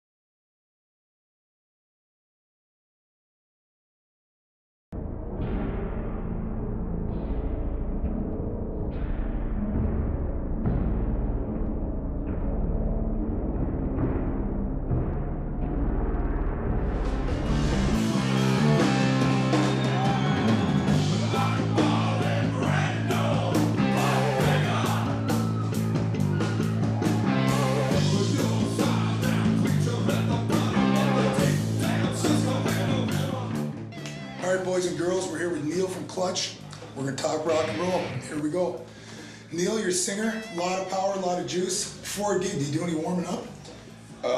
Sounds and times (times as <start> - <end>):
Music: 4.9 - 44.3
Speech: 34.4 - 38.8, 39.5 - 43.5.